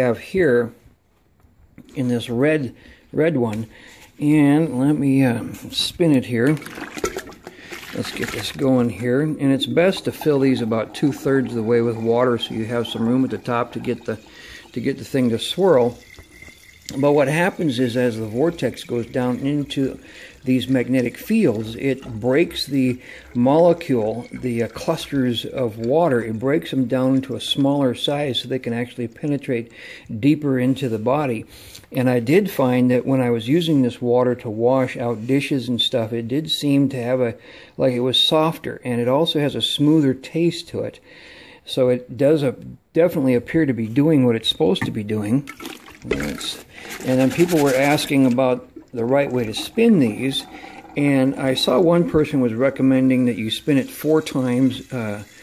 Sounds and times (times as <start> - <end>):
Speech: 0.0 - 0.8, 1.8 - 6.7, 7.9 - 16.0, 16.9 - 41.0, 41.6 - 55.3
Water: 6.2 - 28.4, 44.8 - 55.4.